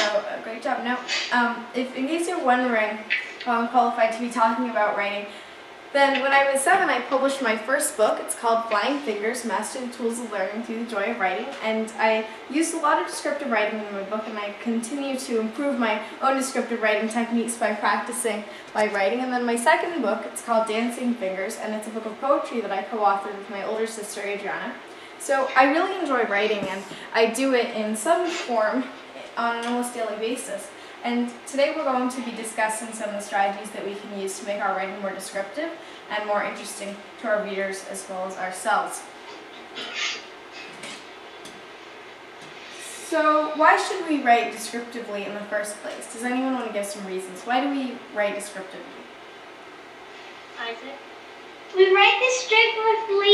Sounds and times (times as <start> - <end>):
Speech: 0.0 - 5.3, 6.0 - 39.1, 43.0 - 49.1, 50.6 - 51.0, 51.7 - 53.3.